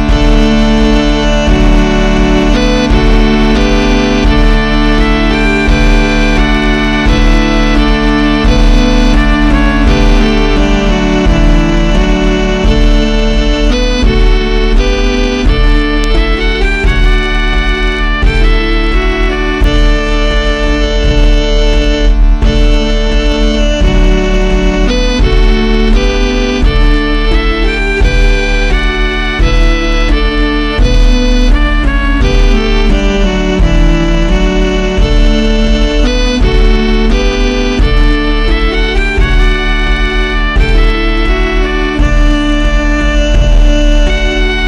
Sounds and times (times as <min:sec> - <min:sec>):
Violin, fiddle: 0:00.0 - 0:44.6.